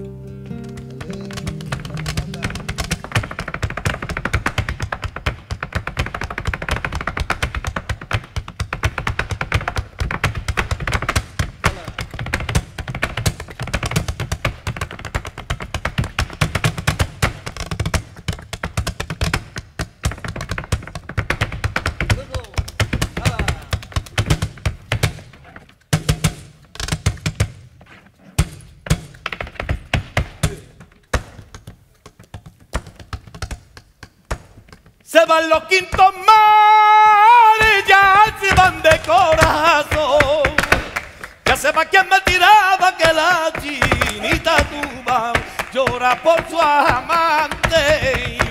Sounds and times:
Speech: 22.1 - 22.6.

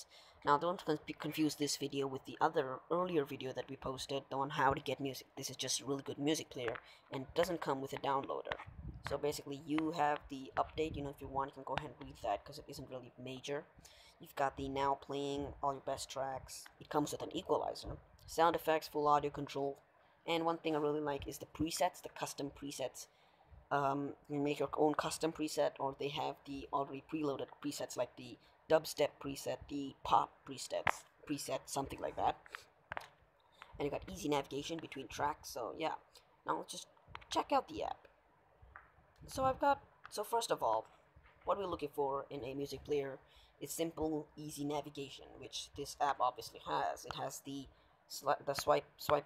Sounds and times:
Speech: 0.0 - 23.1, 23.7 - 32.4, 33.8 - 38.0, 39.3 - 40.8, 41.5 - 49.2.

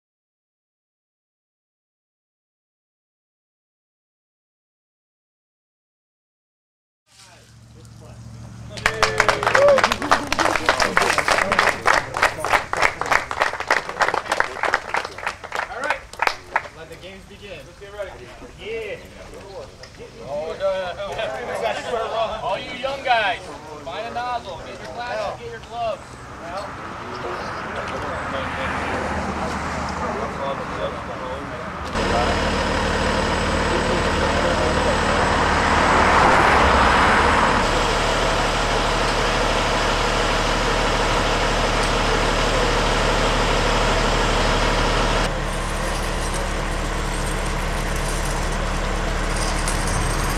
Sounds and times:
Vehicle: 7.1 - 50.3
Speech: 7.2 - 32.5, 33.5 - 35.5
Idling: 7.4 - 16.5, 32.0 - 36.2, 36.8 - 50.3.

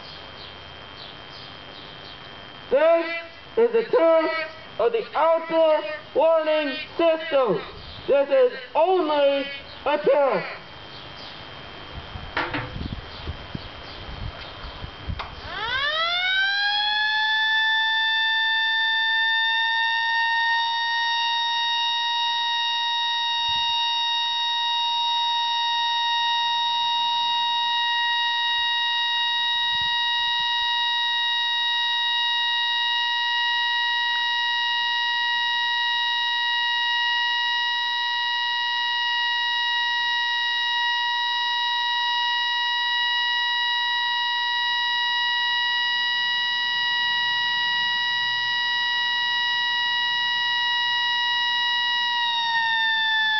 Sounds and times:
Siren: 0.0 - 10.7, 14.9 - 53.4.

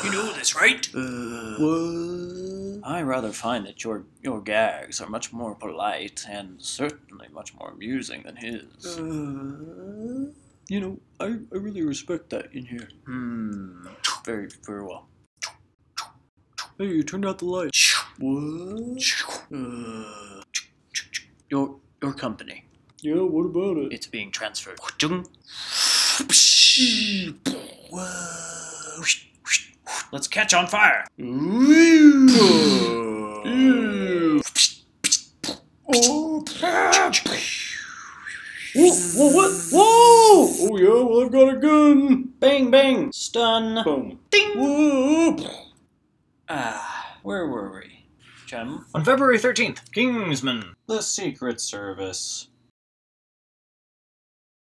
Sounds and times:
Speech: 0.0 - 15.1, 16.8 - 20.0, 21.5 - 25.3, 30.1 - 34.5, 35.9 - 37.5, 38.8 - 45.7, 46.5 - 52.6.

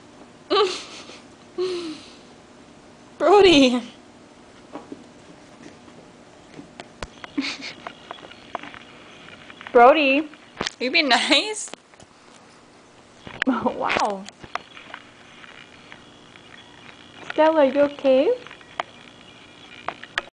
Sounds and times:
Speech: 3.2 - 4.0, 9.8 - 11.7, 17.3 - 18.5.

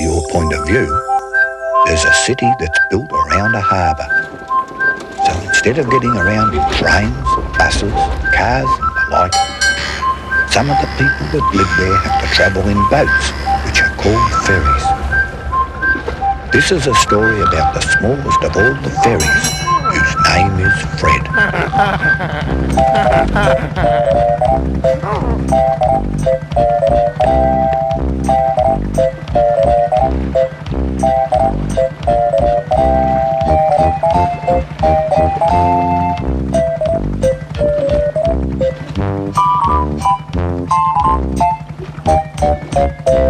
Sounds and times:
Music: 0.0 - 43.2
Motorboat, speedboat: 9.8 - 43.2.

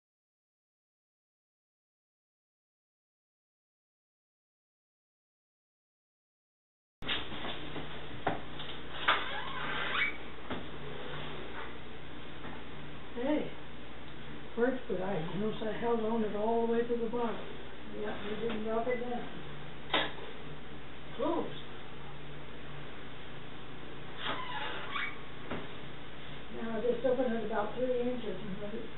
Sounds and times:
Speech: 13.2 - 13.6, 14.6 - 19.4, 21.2 - 21.7, 26.5 - 28.9.

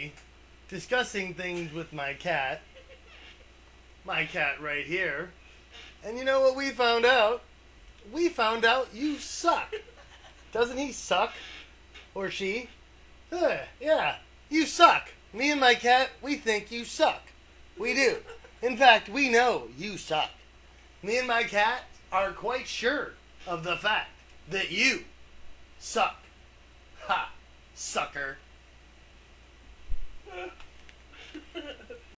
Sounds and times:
Speech: 0.0 - 2.6, 4.1 - 5.4, 6.0 - 9.9, 10.5 - 11.5, 12.2 - 20.4, 21.0 - 25.1, 25.8 - 26.3, 27.0 - 28.4.

